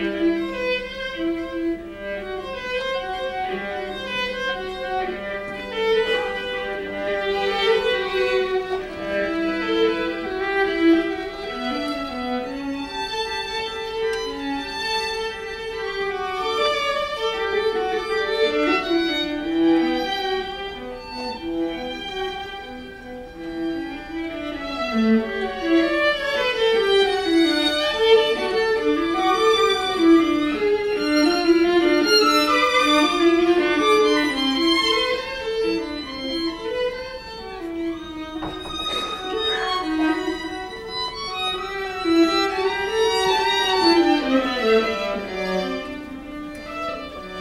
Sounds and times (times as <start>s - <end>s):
Violin, fiddle: 0.0s - 47.4s.